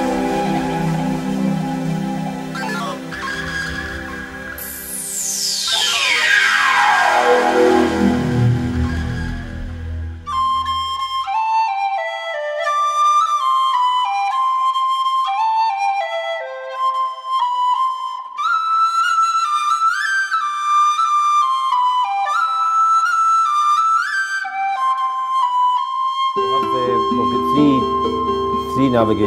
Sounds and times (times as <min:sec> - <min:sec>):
Flute: 0:00.0 - 0:29.2
Speech: 0:02.6 - 0:03.0, 0:26.5 - 0:29.2.